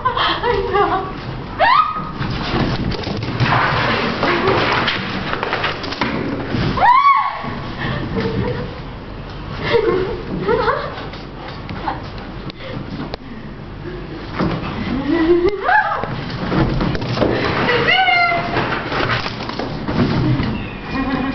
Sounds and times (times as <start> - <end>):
Speech: 17.7 - 18.6.